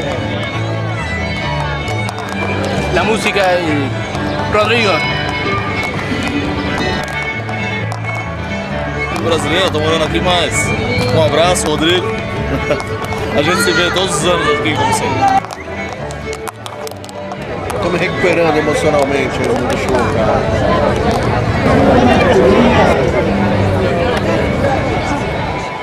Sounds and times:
Music: 0.0s - 25.8s.

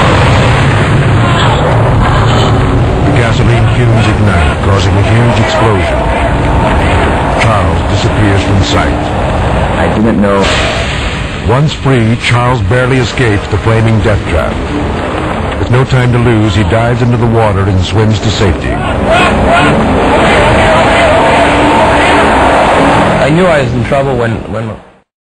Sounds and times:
Speech: 1.3s - 6.0s, 7.4s - 9.1s, 9.8s - 10.6s, 11.5s - 14.6s, 15.6s - 18.8s, 23.2s - 24.8s.

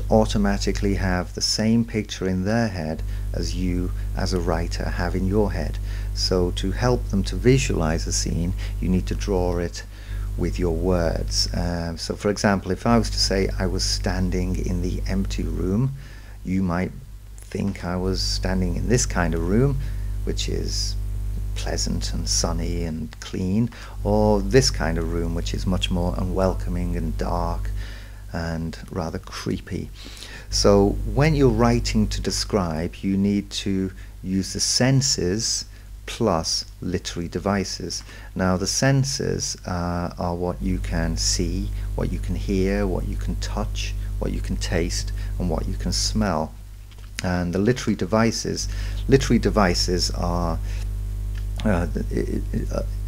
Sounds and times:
Narration, monologue: 0.0s - 53.0s.

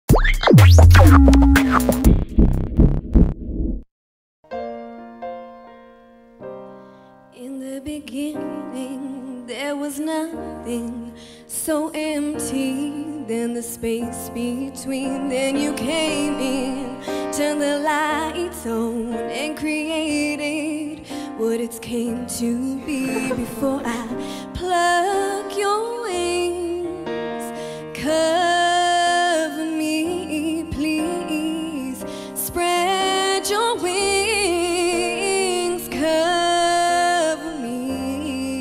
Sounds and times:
Music: 0.1s - 3.4s, 4.4s - 38.6s.

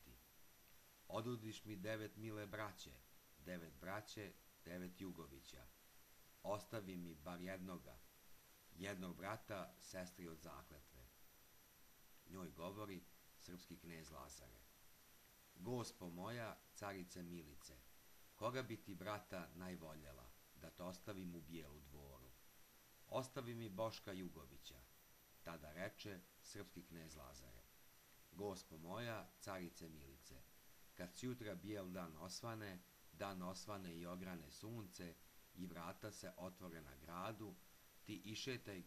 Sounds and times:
Speech: 0.0s - 0.2s, 1.1s - 5.8s, 6.4s - 8.1s, 8.7s - 11.2s, 12.2s - 14.7s, 15.6s - 22.4s, 23.1s - 27.7s, 28.3s - 38.8s.

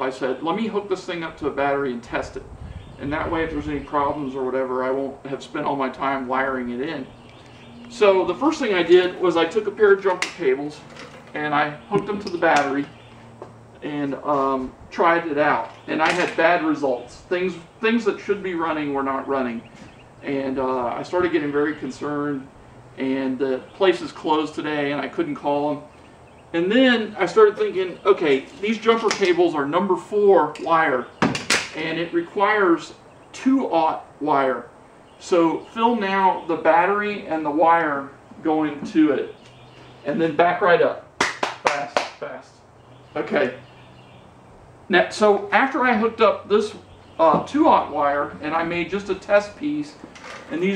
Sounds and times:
Speech: 0.0s - 7.1s, 7.9s - 13.0s, 13.8s - 25.9s, 26.6s - 39.4s, 40.0s - 42.6s, 43.2s - 43.6s, 44.9s - 50.7s.

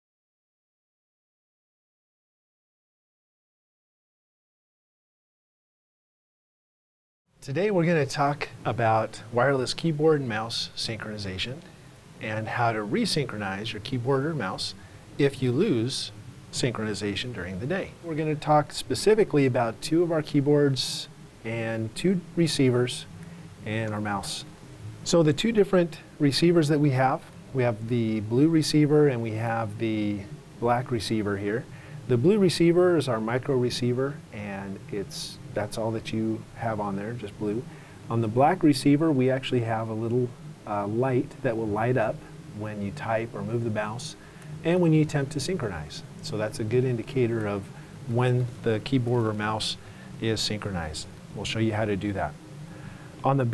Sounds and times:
Speech: 7.4s - 24.5s, 25.1s - 52.4s, 53.2s - 53.5s.

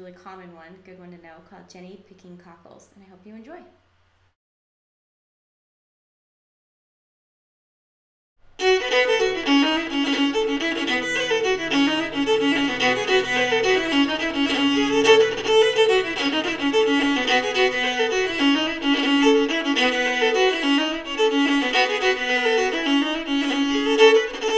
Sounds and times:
Speech: 0.0s - 3.8s
Violin, fiddle: 8.6s - 24.5s.

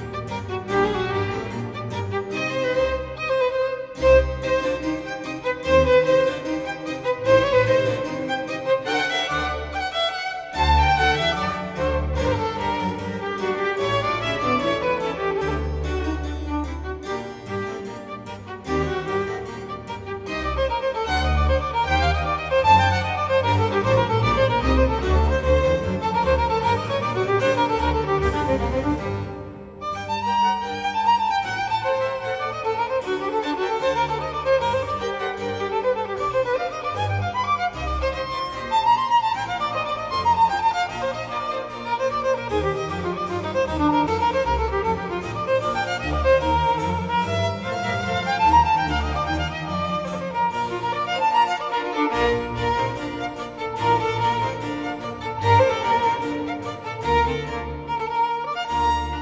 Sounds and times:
Violin, fiddle: 0.0s - 59.2s.

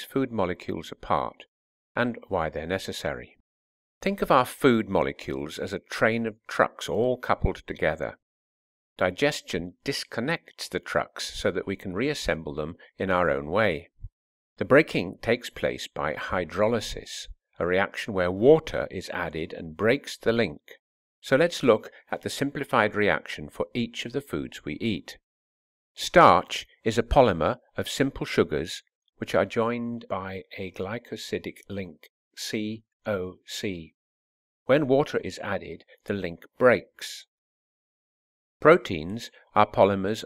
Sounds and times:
Narration, monologue: 0.0s - 3.4s, 4.0s - 8.2s, 9.0s - 25.3s, 26.0s - 34.0s, 34.6s - 37.3s, 38.6s - 40.2s.

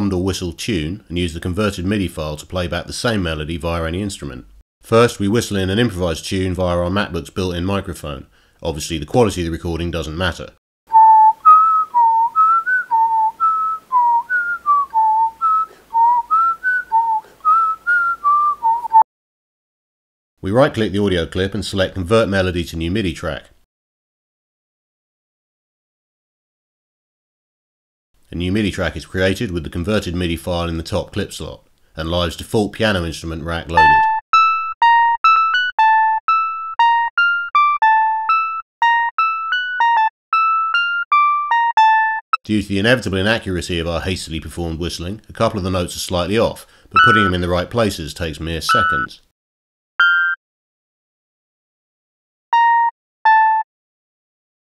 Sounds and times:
Whistling: 10.9s - 19.1s, 47.0s - 47.4s, 48.7s - 49.2s.

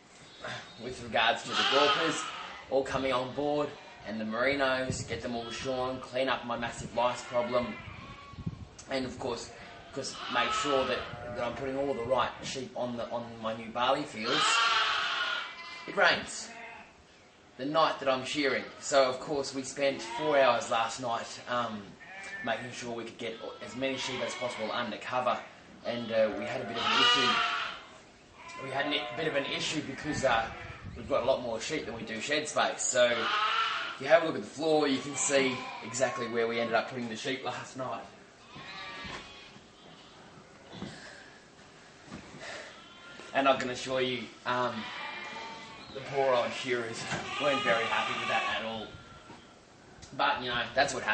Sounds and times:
Speech: 0.5s - 7.8s, 8.8s - 14.7s, 15.9s - 16.6s, 17.6s - 27.5s, 28.5s - 33.3s, 34.0s - 38.1s, 43.3s - 44.9s, 46.0s - 48.9s, 50.1s - 51.1s
Bleat: 1.4s - 2.7s, 3.6s - 4.1s, 5.2s - 6.0s, 7.1s - 8.5s, 9.4s - 12.4s, 14.2s - 17.0s, 19.9s - 20.6s, 22.0s - 22.6s, 23.2s - 31.0s, 33.0s - 34.1s, 34.8s - 36.9s, 38.4s - 40.9s, 42.4s - 43.4s, 44.6s - 49.6s.

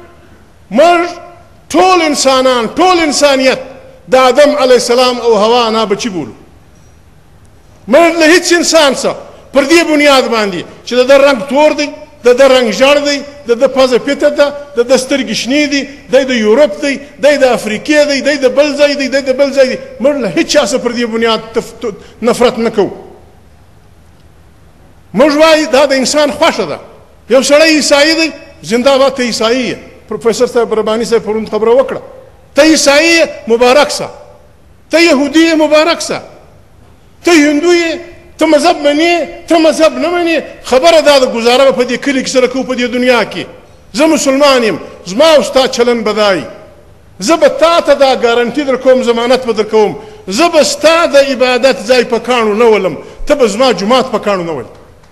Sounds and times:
Male speech, man speaking: 0.7s - 6.4s, 7.9s - 23.0s, 25.2s - 34.2s, 34.9s - 36.4s, 37.2s - 54.8s.

